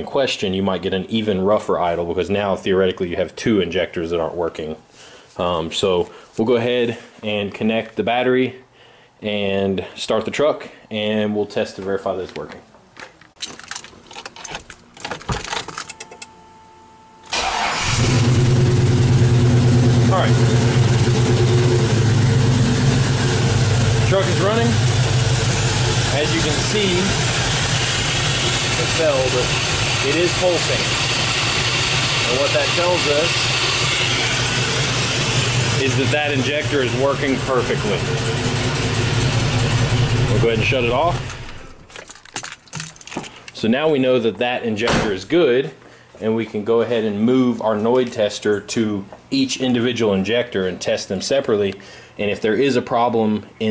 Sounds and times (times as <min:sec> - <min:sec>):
Speech: 0:00.0 - 0:04.8, 0:05.4 - 0:12.7, 0:20.1 - 0:20.4, 0:24.0 - 0:24.8, 0:26.1 - 0:27.2, 0:28.7 - 0:31.0, 0:32.2 - 0:33.4, 0:35.7 - 0:38.1, 0:40.3 - 0:41.2, 0:43.6 - 0:53.7
Engine: 0:17.3 - 0:41.9
Car: 0:17.4 - 0:41.9.